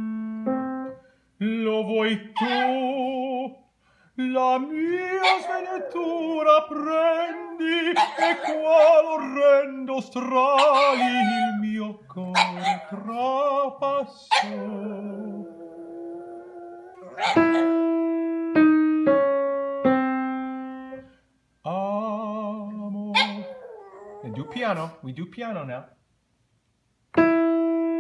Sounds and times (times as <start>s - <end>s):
Bow-wow: 2.4s - 2.8s, 8.0s - 9.0s, 10.6s - 11.6s, 12.4s - 13.0s, 14.3s - 14.6s, 17.1s - 17.8s, 23.2s - 23.6s
Yip: 2.4s - 2.9s, 5.2s - 5.6s, 8.0s - 9.0s, 10.6s - 11.6s, 12.4s - 13.0s, 14.3s - 14.6s, 17.1s - 17.8s, 23.2s - 24.4s.